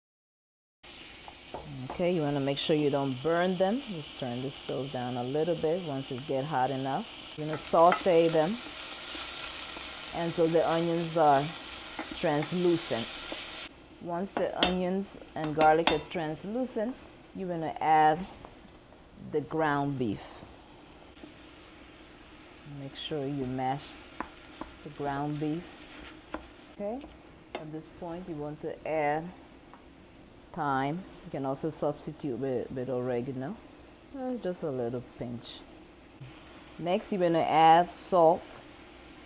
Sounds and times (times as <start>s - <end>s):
Frying (food): 0.8s - 39.2s
Sizzle: 0.8s - 39.2s.